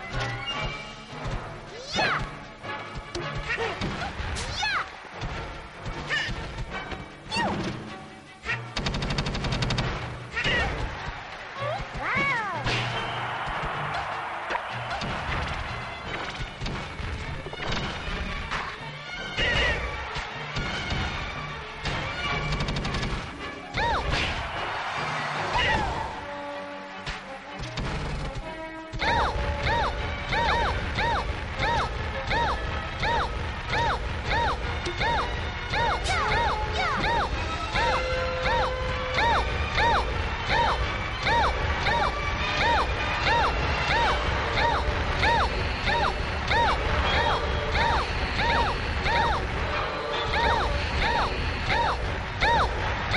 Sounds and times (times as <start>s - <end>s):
Music: 0.0s - 53.1s
Speech: 11.6s - 12.7s.